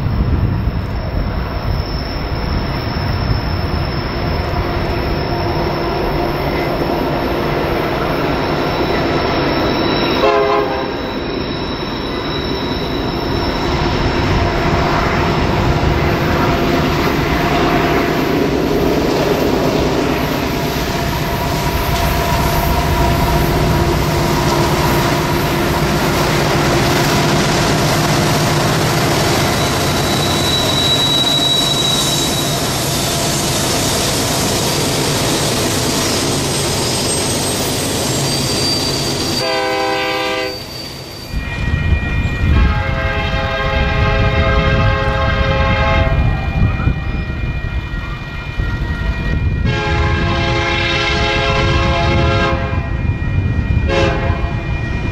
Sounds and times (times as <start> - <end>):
Railroad car, train wagon: 0.0 - 55.1
Train: 0.0 - 55.1.